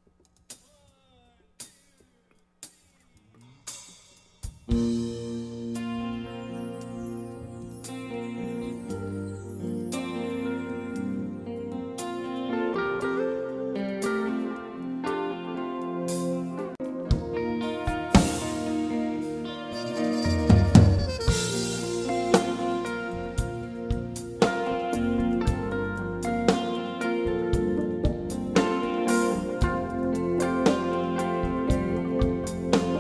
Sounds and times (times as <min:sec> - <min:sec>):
Music: 0:00.0 - 0:33.0.